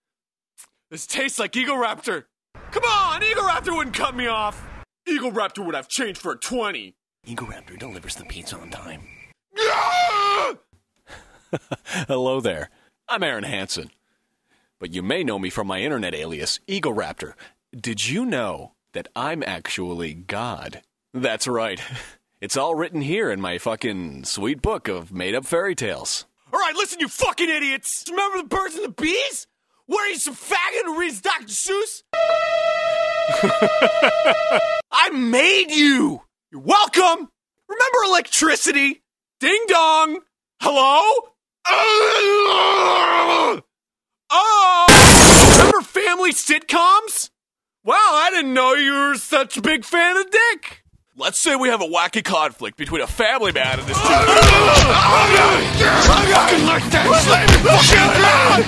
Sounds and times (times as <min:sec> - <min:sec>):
Speech: 0:00.9 - 0:09.0, 0:12.1 - 0:13.9, 0:14.8 - 0:21.8, 0:22.4 - 0:32.1, 0:34.9 - 0:41.4, 0:45.7 - 0:58.6.